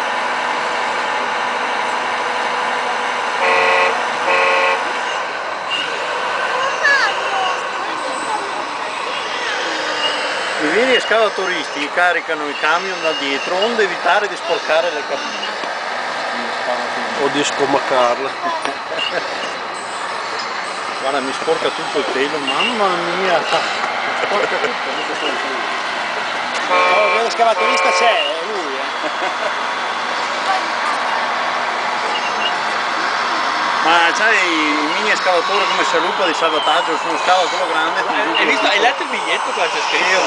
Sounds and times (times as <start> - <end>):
Speech: 26.9 - 28.9, 33.8 - 40.2.